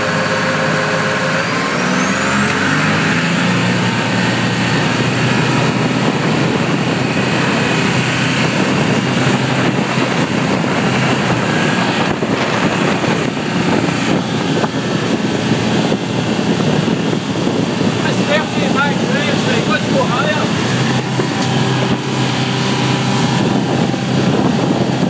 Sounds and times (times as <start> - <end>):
Speech: 18.0 - 20.6.